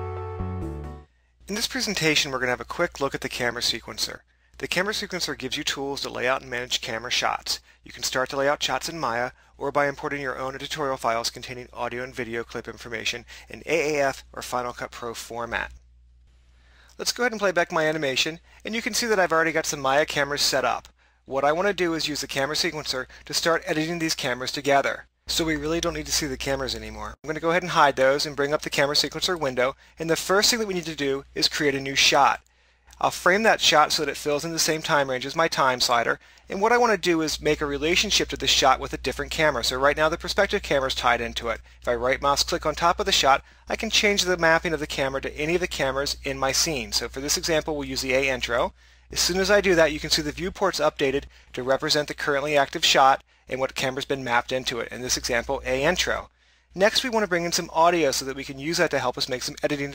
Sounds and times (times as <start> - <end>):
Speech: 1.5 - 15.8, 17.0 - 32.4, 33.0 - 59.9.